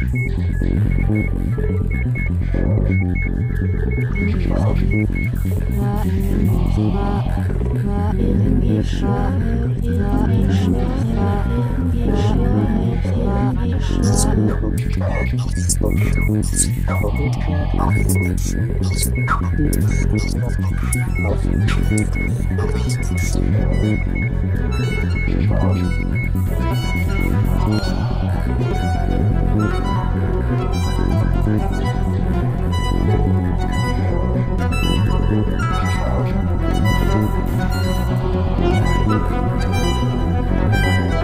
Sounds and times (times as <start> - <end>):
Ambient music: 0.0 - 41.2.